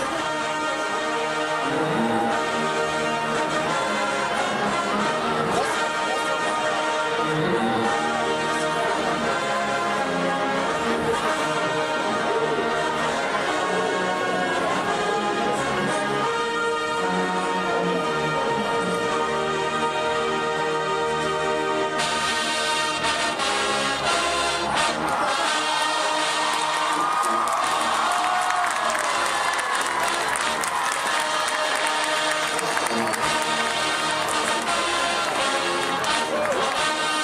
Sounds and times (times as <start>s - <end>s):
Music: 0.0s - 37.2s.